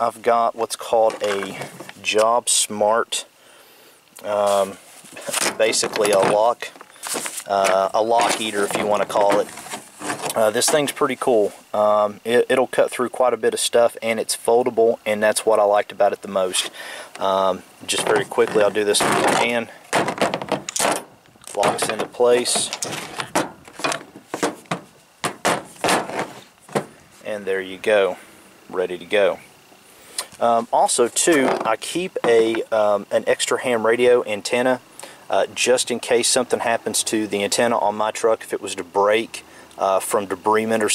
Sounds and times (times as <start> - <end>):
Speech: 0.0 - 3.3, 4.2 - 6.8, 7.5 - 9.5, 10.3 - 19.8, 21.5 - 22.8, 27.2 - 29.4, 30.4 - 40.9.